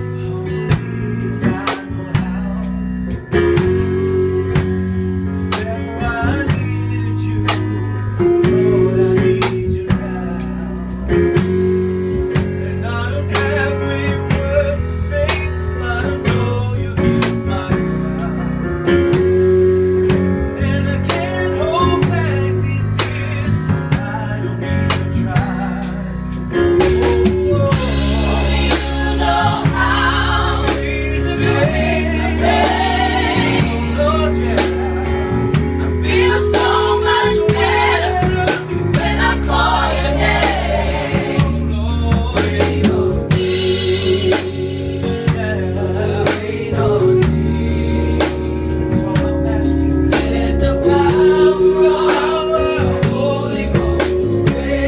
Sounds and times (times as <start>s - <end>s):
Music: 0.0s - 54.8s.